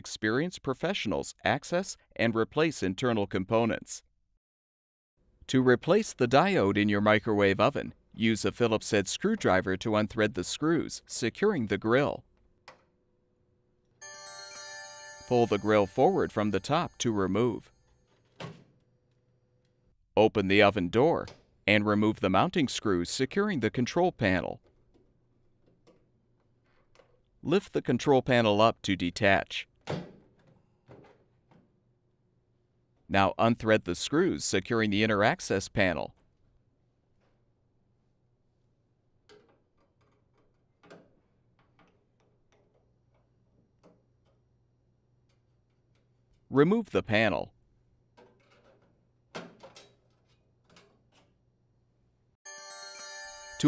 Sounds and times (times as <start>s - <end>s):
Speech: 0.0s - 4.1s, 5.5s - 12.2s, 15.3s - 17.7s, 20.2s - 24.6s, 27.4s - 29.7s, 33.1s - 36.2s, 46.5s - 47.5s
Music: 14.0s - 17.1s, 52.5s - 53.6s.